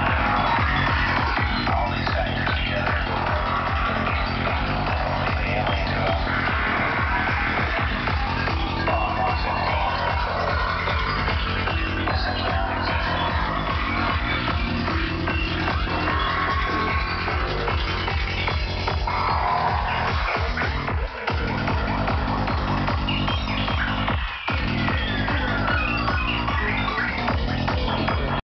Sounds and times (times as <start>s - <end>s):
Music: 0.0s - 28.4s.